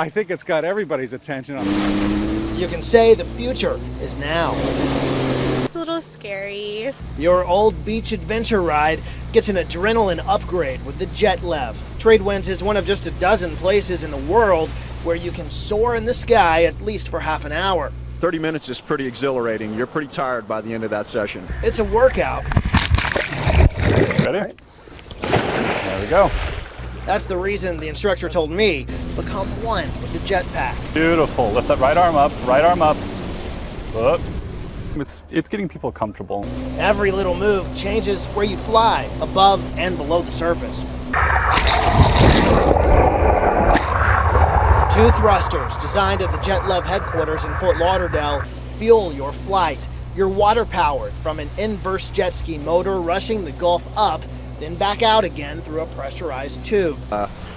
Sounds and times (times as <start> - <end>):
Speech: 0.0 - 1.7, 2.5 - 4.6, 5.7 - 22.4, 24.3 - 24.6, 25.9 - 26.3, 27.1 - 33.0, 34.0 - 34.2, 35.0 - 40.8, 44.9 - 57.3.